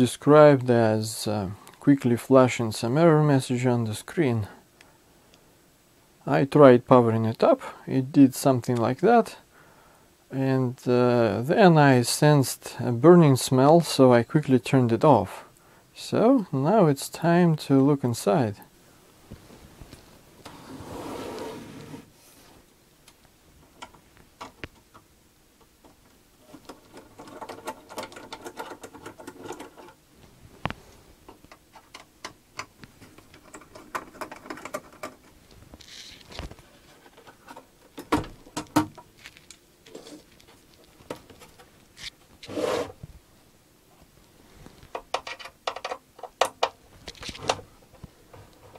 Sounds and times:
Inside, small room: 0.0s - 48.7s.

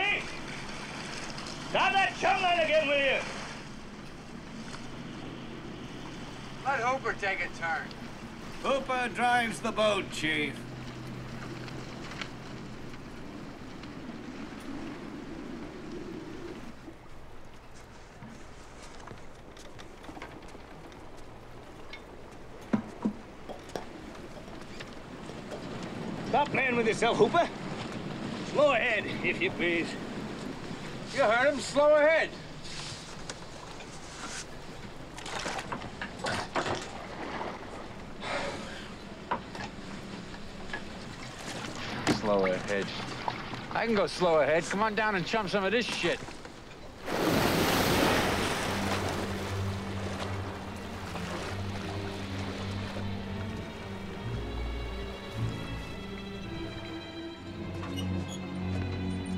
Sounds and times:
Wind: 0.0s - 59.3s.

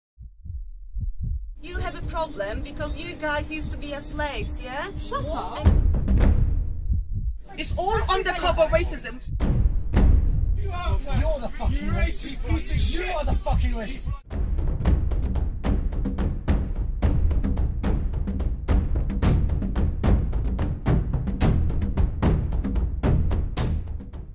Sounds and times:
Heart sounds, heartbeat: 0.2s - 14.2s
Speech: 1.6s - 5.7s, 7.5s - 9.2s, 10.6s - 14.2s
Music: 1.7s - 6.8s, 7.6s - 24.3s.

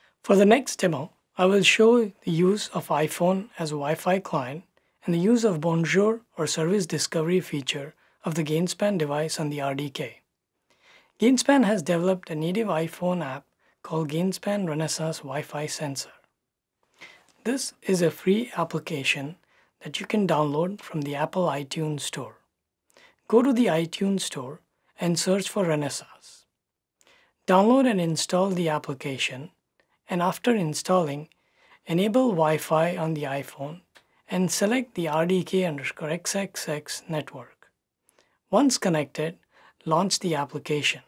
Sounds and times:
Inside, small room: 0.0s - 41.0s
Narration, monologue: 0.0s - 41.0s.

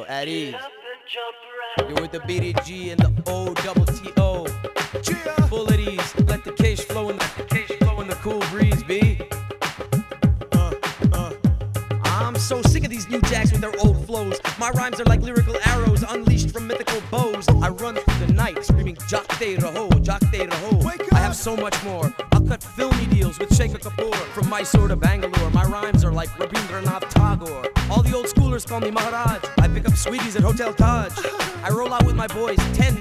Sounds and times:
Speech: 0.0s - 0.6s, 1.8s - 4.4s, 12.1s - 31.1s, 31.7s - 33.0s
Music: 1.7s - 33.0s.

